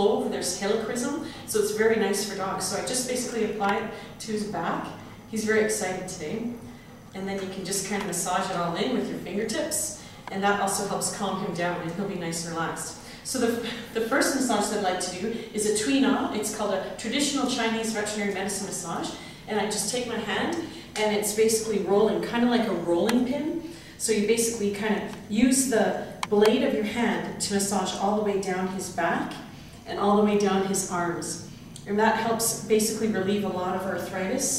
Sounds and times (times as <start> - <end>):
Speech: 0.0 - 34.5.